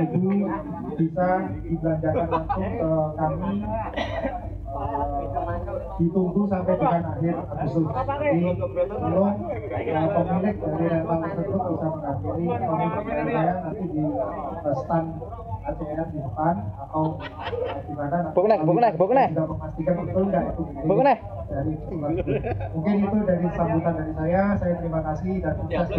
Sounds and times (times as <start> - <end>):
Speech: 0.0 - 25.9.